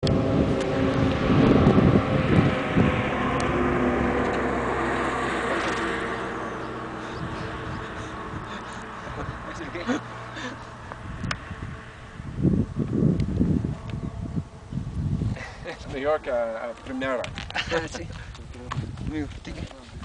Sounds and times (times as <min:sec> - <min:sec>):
Speech: 0:15.8 - 0:19.9
Clip-clop: 0:16.6 - 0:20.0.